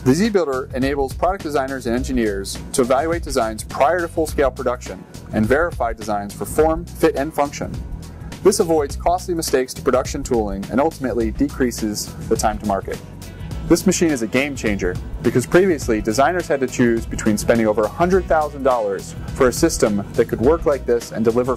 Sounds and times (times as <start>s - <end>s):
Music: 0.0s - 21.5s
Speech: 0.1s - 7.8s, 8.4s - 13.0s, 13.7s - 21.5s.